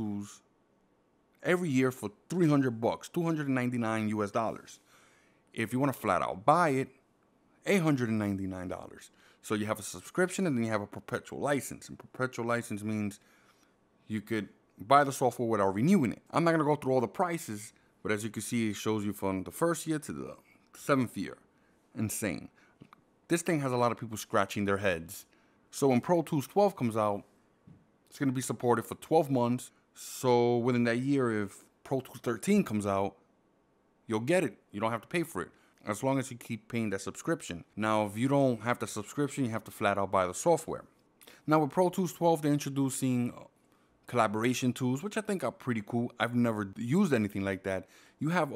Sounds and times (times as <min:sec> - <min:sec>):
Speech: 0:00.0 - 0:00.5, 0:01.4 - 0:04.8, 0:05.6 - 0:07.0, 0:07.6 - 0:13.2, 0:14.1 - 0:22.6, 0:23.3 - 0:27.3, 0:28.1 - 0:33.2, 0:34.1 - 0:48.5.